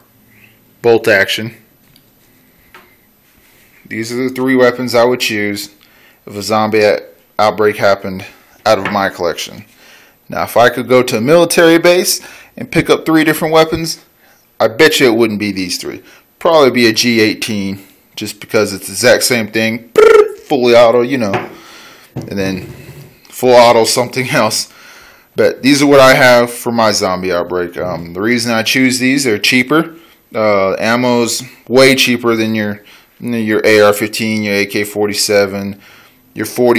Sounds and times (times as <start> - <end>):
Speech: 0.8 - 1.7, 3.9 - 9.7, 10.3 - 21.5, 22.2 - 24.7, 25.4 - 35.8, 36.4 - 36.7.